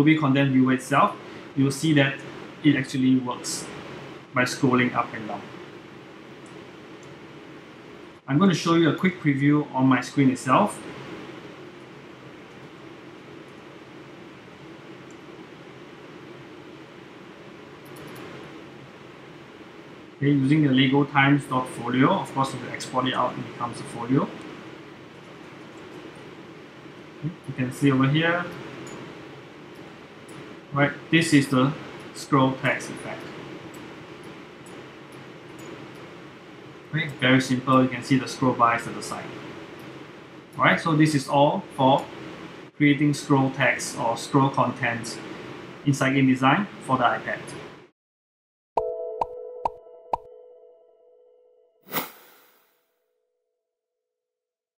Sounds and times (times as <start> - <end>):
Speech: 0.0 - 3.8, 4.4 - 5.5, 8.3 - 10.9, 20.2 - 24.4, 27.2 - 28.6, 30.8 - 33.4, 36.9 - 39.4, 40.6 - 42.1, 42.8 - 47.6
Music: 48.8 - 51.7.